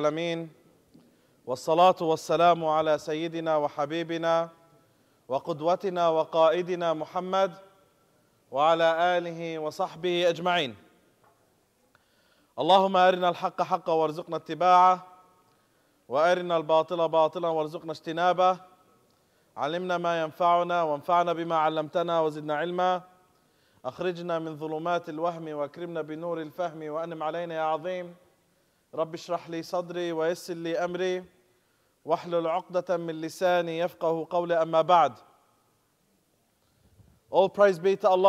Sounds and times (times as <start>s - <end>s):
Speech: 0.0s - 0.6s, 1.5s - 4.6s, 5.3s - 7.6s, 8.5s - 10.8s, 12.6s - 15.1s, 16.1s - 18.6s, 19.6s - 23.1s, 23.9s - 28.2s, 29.0s - 31.3s, 32.1s - 35.2s, 37.3s - 38.2s.